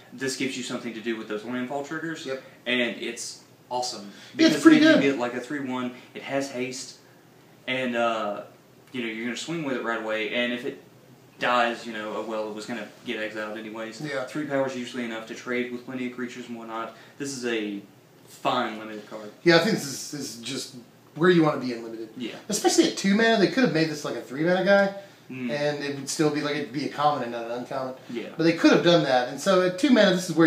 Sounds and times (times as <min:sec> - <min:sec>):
Speech: 0:00.2 - 0:07.0, 0:07.7 - 0:10.8, 0:11.4 - 0:30.4.